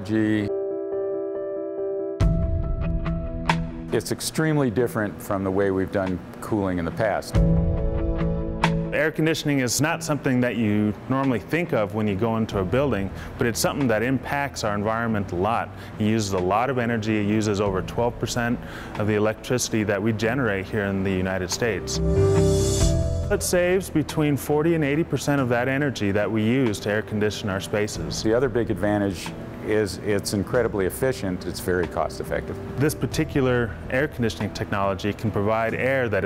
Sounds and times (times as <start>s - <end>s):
Speech: 0.0s - 0.5s, 3.9s - 7.4s, 9.0s - 22.0s, 23.3s - 36.2s
Music: 0.0s - 36.2s.